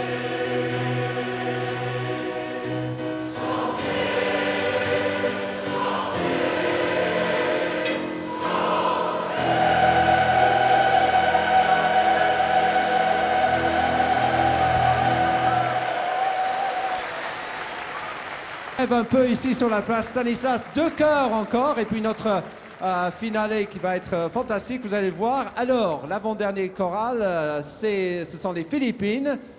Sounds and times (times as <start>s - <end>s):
Music: 0.0s - 17.8s.